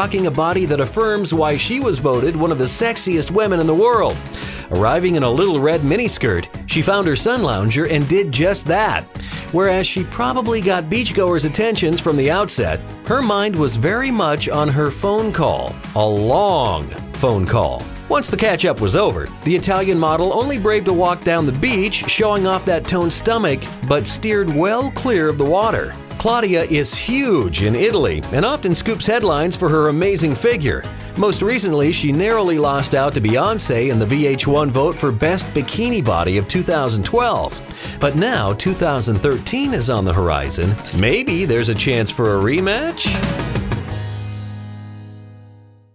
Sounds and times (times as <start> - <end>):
Speech: 0.0 - 43.2
Music: 0.0 - 45.9.